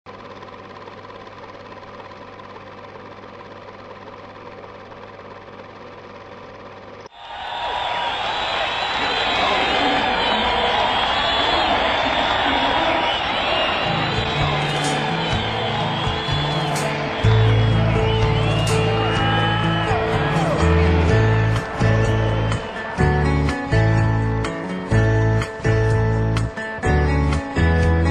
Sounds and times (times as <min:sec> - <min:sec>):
Vehicle: 0:00.1 - 0:07.1, 0:10.1 - 0:28.1
Inside, public space: 0:07.1 - 0:27.0.